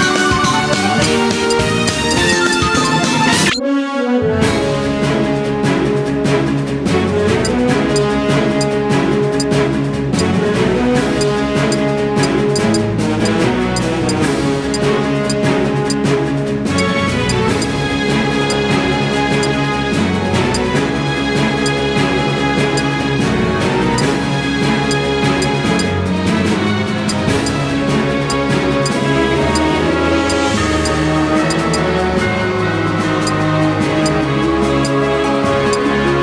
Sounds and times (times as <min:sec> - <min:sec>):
Music: 0:00.0 - 0:36.2.